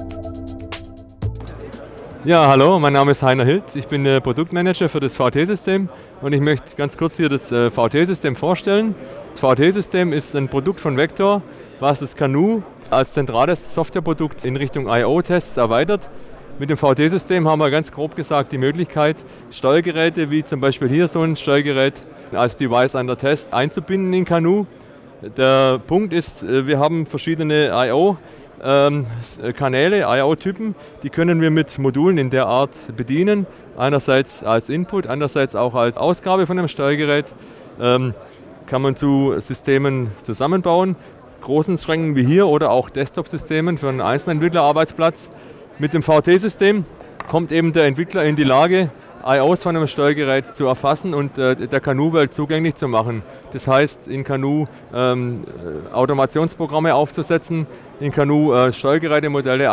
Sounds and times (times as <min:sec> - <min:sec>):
Speech: 0:01.4 - 0:59.7.